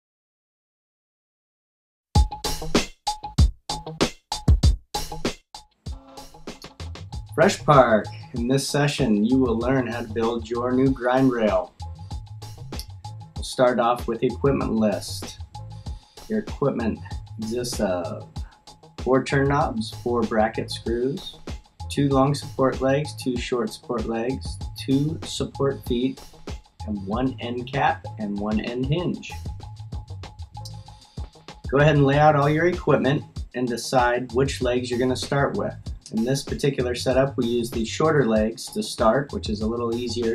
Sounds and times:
Music: 0:02.2 - 0:40.3
Speech: 0:07.4 - 0:11.7, 0:13.4 - 0:15.4, 0:16.3 - 0:18.3, 0:19.1 - 0:26.2, 0:26.9 - 0:29.4, 0:31.7 - 0:40.3.

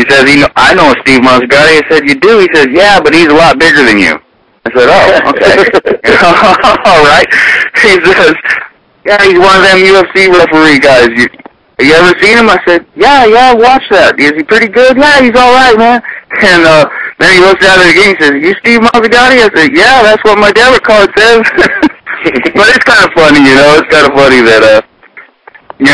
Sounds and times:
Speech: 0:00.0 - 0:24.9.

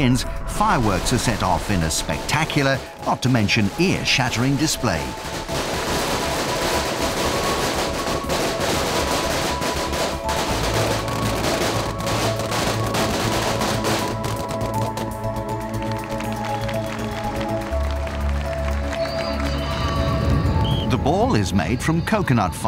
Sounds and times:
Speech: 0:00.0 - 0:05.2, 0:20.9 - 0:22.6
Music: 0:00.0 - 0:22.6.

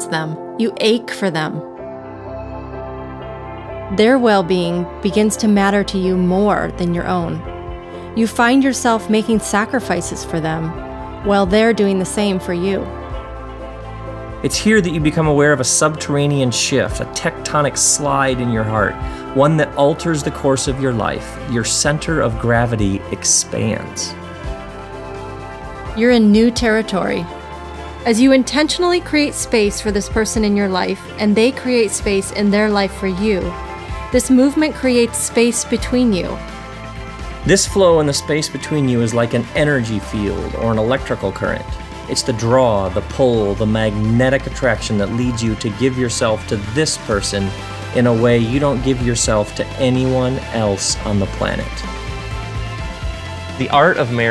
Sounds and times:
Speech: 0:00.0 - 0:01.6, 0:04.0 - 0:07.4, 0:08.2 - 0:12.9, 0:14.5 - 0:24.2, 0:26.0 - 0:27.3, 0:28.1 - 0:33.5, 0:34.2 - 0:36.4, 0:37.5 - 0:51.9, 0:53.6 - 0:54.3
Music: 0:00.0 - 0:54.3.

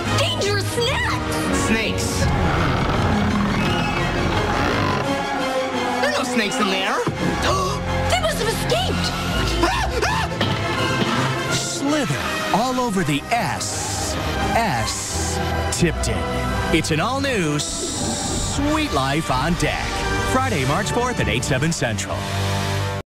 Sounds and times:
Music: 0:00.0 - 0:23.0.

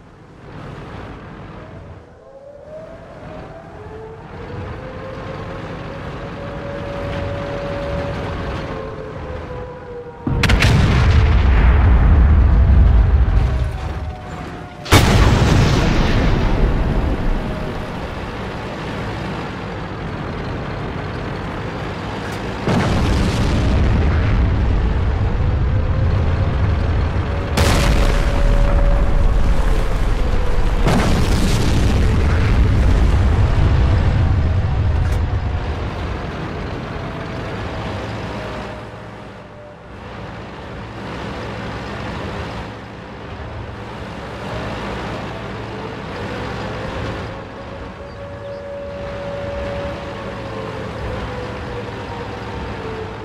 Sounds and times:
Vehicle: 0:00.0 - 0:53.2.

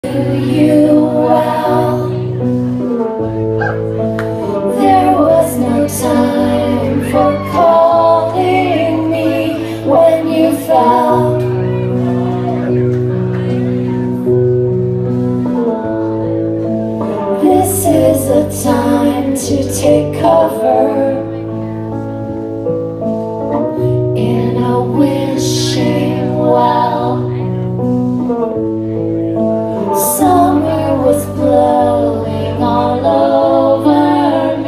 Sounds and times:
Female singing: 0:00.0 - 0:02.3, 0:04.4 - 0:12.3, 0:17.1 - 0:21.5, 0:24.1 - 0:27.5, 0:29.8 - 0:34.6
Music: 0:00.0 - 0:34.6.

